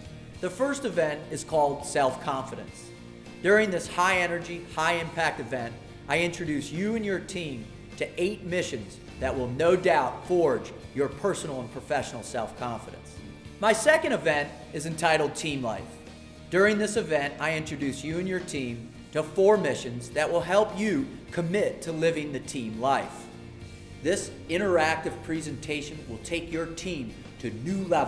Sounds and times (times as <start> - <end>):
Music: 0.0 - 28.0
Narration, monologue: 0.0 - 28.0
Male speech, man speaking: 0.4 - 23.3, 24.0 - 28.0.